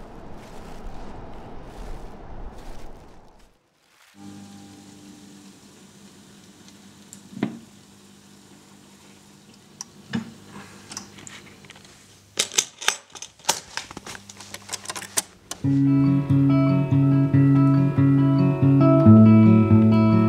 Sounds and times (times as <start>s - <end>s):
Music: 4.2s - 5.7s, 15.6s - 20.2s.